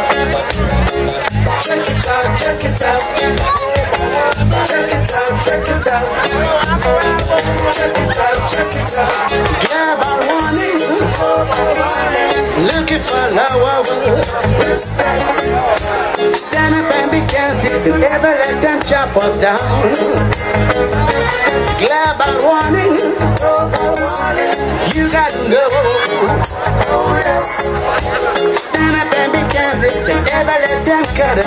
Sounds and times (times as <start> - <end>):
Afrobeat: 0.0 - 31.4
Crowd: 0.0 - 31.4
Reggae: 0.0 - 31.4.